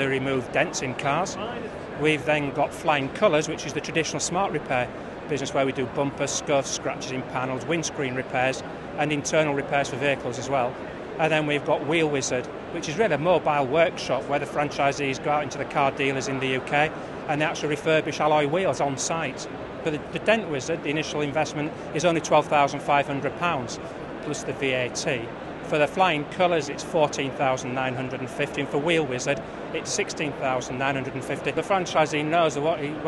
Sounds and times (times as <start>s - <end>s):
Speech: 0.0s - 33.0s.